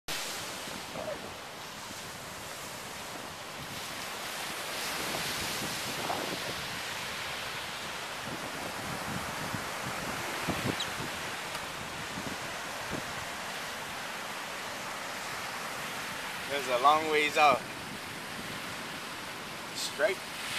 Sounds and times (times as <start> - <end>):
Ocean: 0.1 - 20.5.